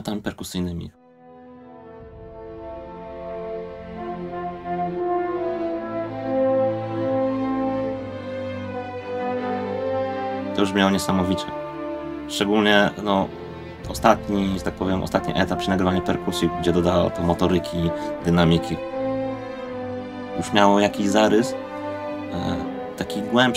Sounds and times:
Trombone: 1.4 - 23.5.

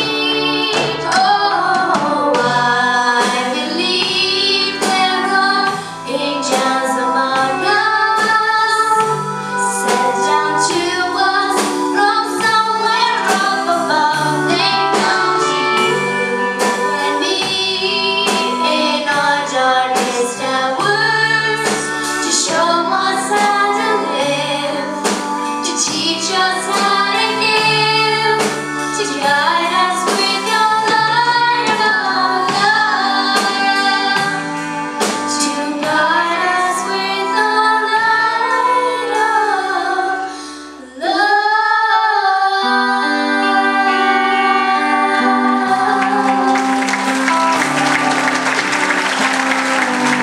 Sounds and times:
Inside, large room or hall: 0.0 - 50.2
Music: 0.0 - 50.2
Singing: 0.0 - 50.2.

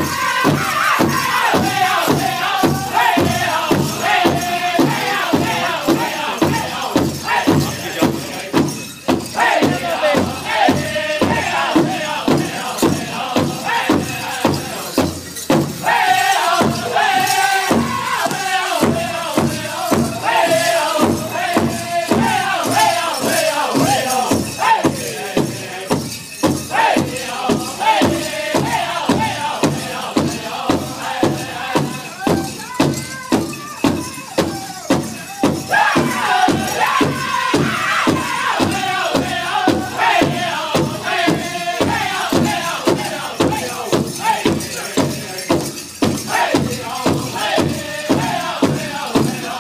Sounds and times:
Music: 0.0 - 49.6
Speech: 7.4 - 8.6, 32.1 - 35.5.

